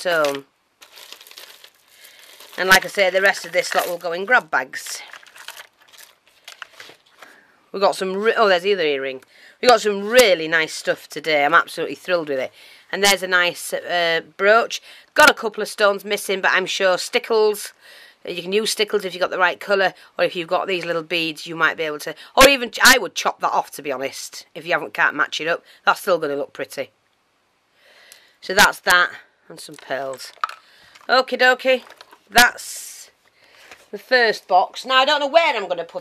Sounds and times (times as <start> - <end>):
Speech: 0.0 - 0.5, 2.6 - 5.2, 7.7 - 26.9, 28.4 - 30.4, 31.1 - 33.2, 33.9 - 36.0
Inside, small room: 0.0 - 36.0.